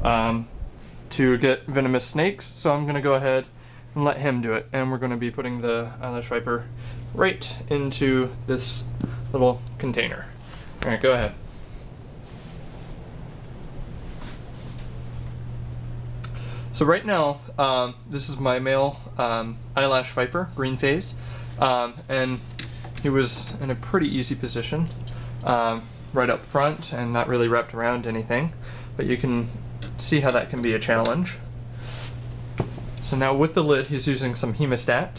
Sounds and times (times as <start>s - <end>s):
Speech: 0.0s - 0.5s, 1.1s - 11.4s, 16.8s - 31.4s, 33.0s - 35.1s.